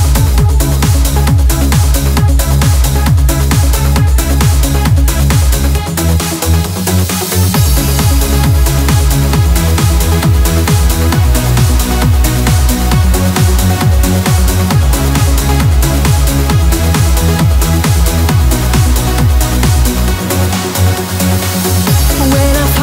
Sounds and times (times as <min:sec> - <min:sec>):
Dance music: 0:00.0 - 0:22.8
Electronic music: 0:00.0 - 0:22.8.